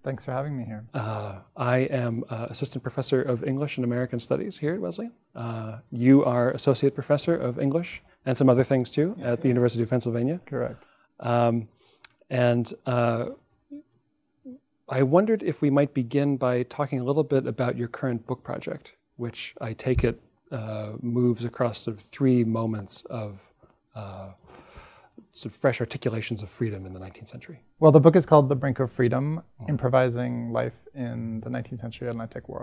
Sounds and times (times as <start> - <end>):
Speech: 0.0 - 11.7, 12.3 - 13.4, 14.5 - 24.4, 25.3 - 32.6.